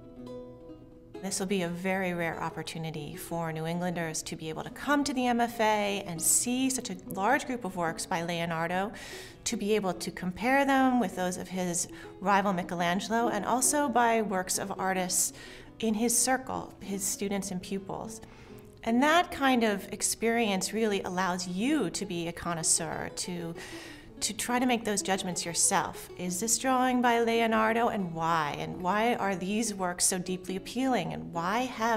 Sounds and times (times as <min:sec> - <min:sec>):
Inside, small room: 0:00.0 - 0:31.9
Music: 0:00.0 - 0:31.9
Speech: 0:01.2 - 0:18.2, 0:18.8 - 0:23.6, 0:24.2 - 0:31.9.